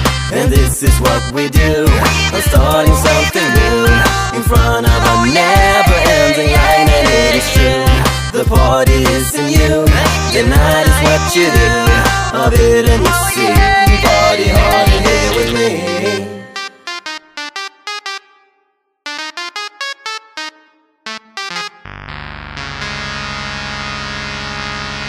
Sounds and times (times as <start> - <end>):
Music of Africa: 0.0 - 16.4
Singing: 0.3 - 16.6.